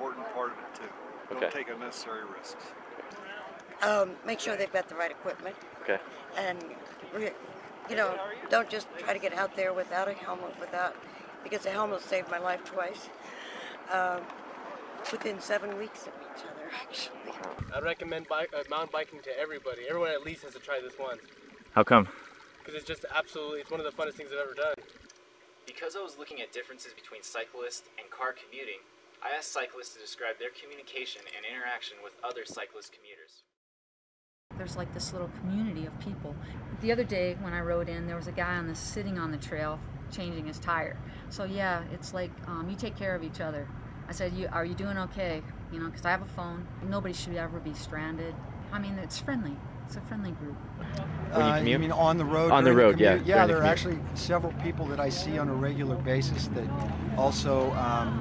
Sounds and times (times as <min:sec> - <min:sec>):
Speech: 0:00.0 - 0:02.7, 0:03.8 - 0:10.9, 0:11.5 - 0:13.1, 0:13.8 - 0:14.2, 0:15.1 - 0:21.2, 0:21.8 - 0:22.1, 0:22.7 - 0:24.8, 0:25.7 - 0:33.4, 0:34.6 - 0:58.2.